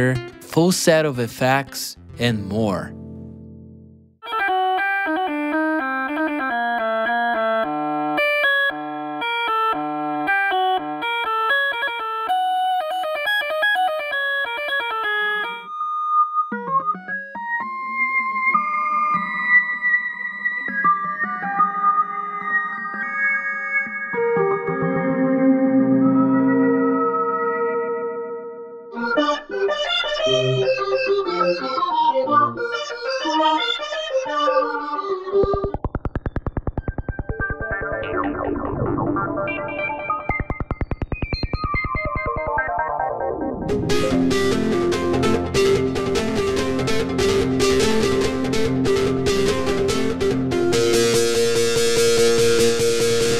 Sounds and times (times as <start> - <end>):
Electronic organ: 4.2 - 53.3.